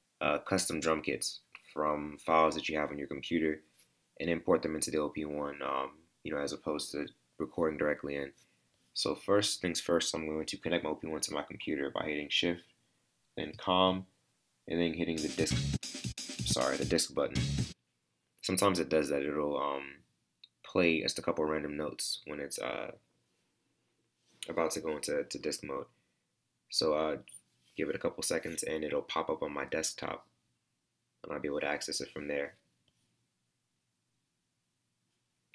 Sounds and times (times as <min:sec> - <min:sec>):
Speech: 0:00.2 - 0:08.4, 0:09.0 - 0:12.7, 0:13.4 - 0:15.6, 0:16.4 - 0:17.4, 0:18.4 - 0:20.0, 0:20.6 - 0:23.0, 0:24.4 - 0:25.9, 0:26.7 - 0:30.3, 0:31.2 - 0:32.6.